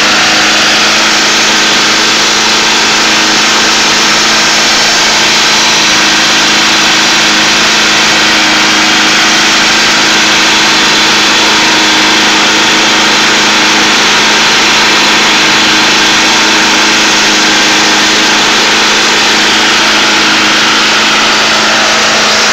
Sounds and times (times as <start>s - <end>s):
Light engine (high frequency): 0.0s - 22.5s.